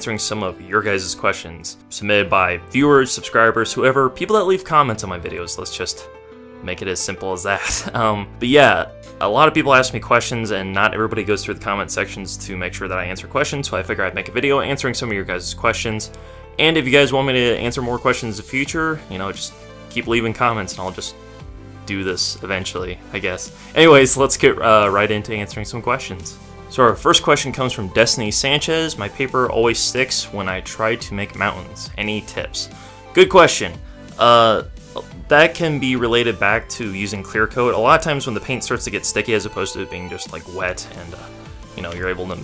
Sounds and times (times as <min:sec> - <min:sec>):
Speech: 0:00.0 - 0:21.2, 0:21.9 - 0:42.4
Music: 0:00.0 - 0:42.4.